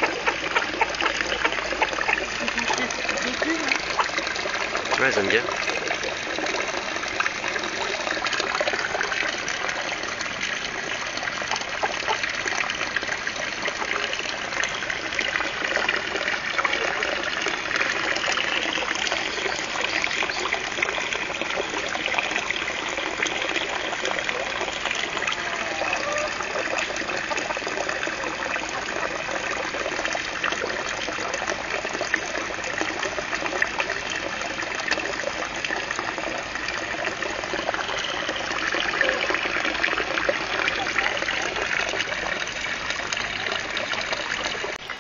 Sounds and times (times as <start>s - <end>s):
Water: 0.0s - 45.0s.